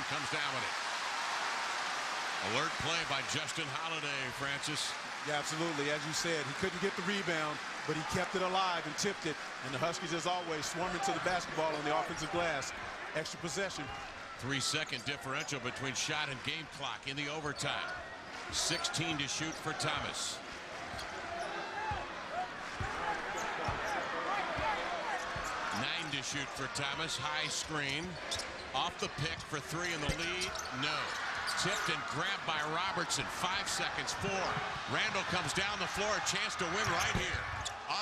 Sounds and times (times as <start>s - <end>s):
Speech: 0.0s - 0.7s, 2.4s - 20.4s, 24.3s - 28.2s, 28.8s - 38.0s.